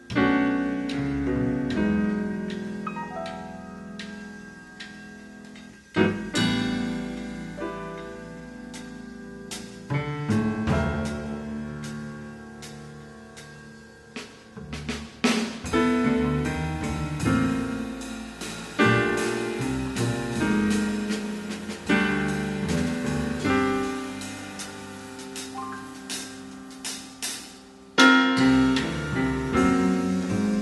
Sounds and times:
Percussion: 0:00.0 - 0:30.6.

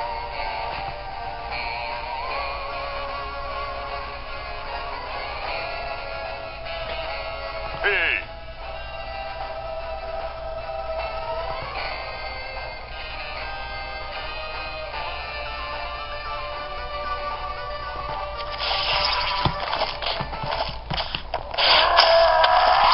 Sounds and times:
Music: 0:00.0 - 0:22.9.

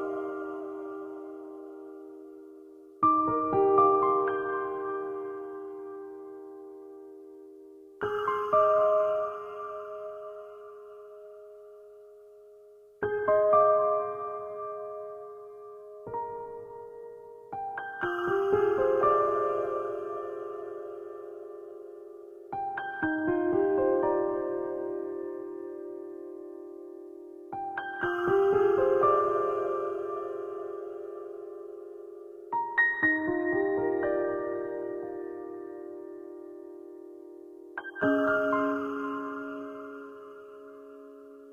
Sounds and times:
Music: 0:00.0 - 0:41.5.

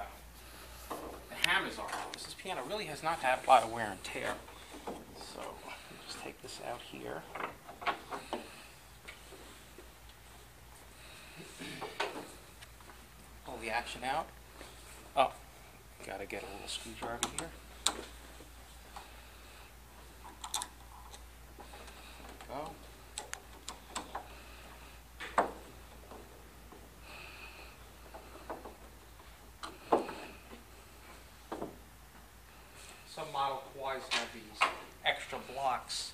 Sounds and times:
Speech: 0:01.3 - 0:04.4, 0:05.2 - 0:07.3, 0:13.4 - 0:14.3, 0:16.0 - 0:17.6, 0:33.1 - 0:36.1.

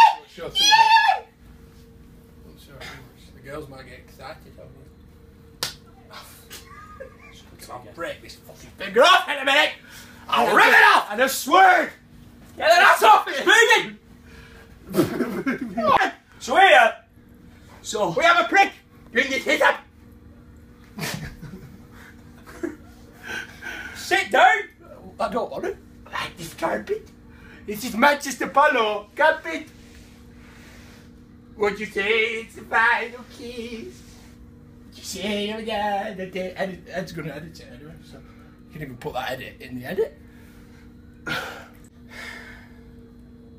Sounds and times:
Inside, small room: 0:00.0 - 0:43.5
Slap, smack: 0:05.6 - 0:05.8
Speech: 0:07.6 - 0:12.0, 0:12.6 - 0:14.0, 0:15.8 - 0:17.0, 0:17.8 - 0:19.9, 0:24.0 - 0:27.1, 0:27.7 - 0:29.7, 0:35.0 - 0:40.2.

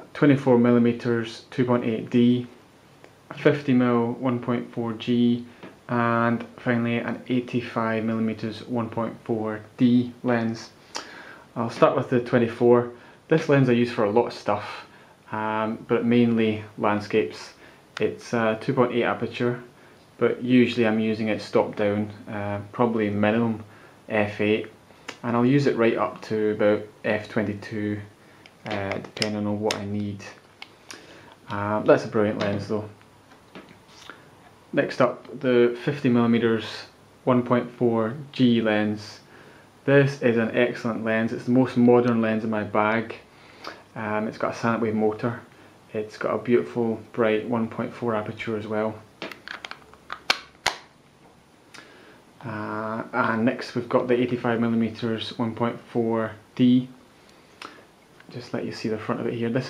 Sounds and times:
Speech: 0:00.0 - 0:02.6, 0:03.3 - 0:10.8, 0:11.6 - 0:30.4, 0:31.4 - 0:33.0, 0:34.7 - 0:43.3, 0:43.9 - 0:49.1, 0:52.4 - 0:57.0, 0:58.3 - 0:59.6.

